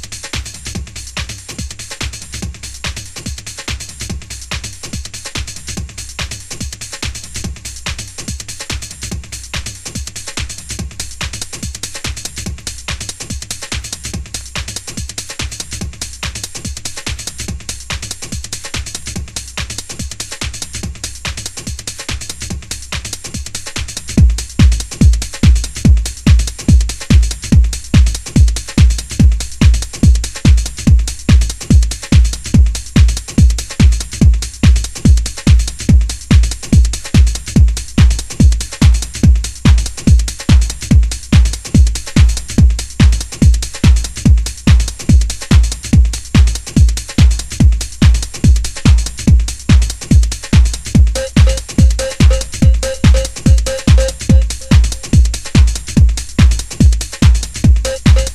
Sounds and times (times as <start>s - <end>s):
Music: 0.0s - 58.3s.